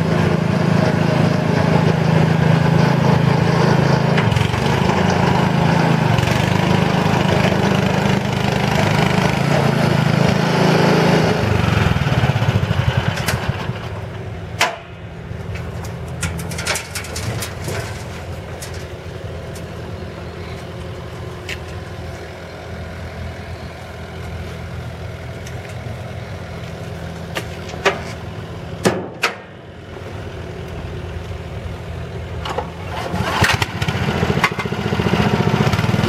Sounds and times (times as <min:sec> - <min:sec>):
Vehicle: 0:00.0 - 0:36.0.